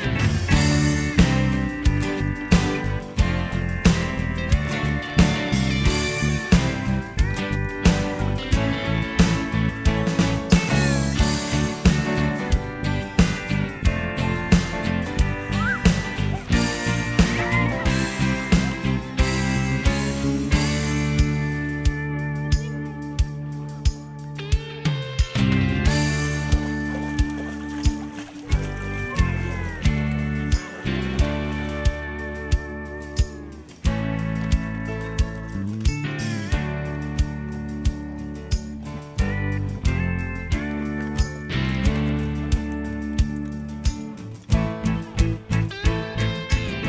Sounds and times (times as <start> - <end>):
Music: 0.0 - 46.8.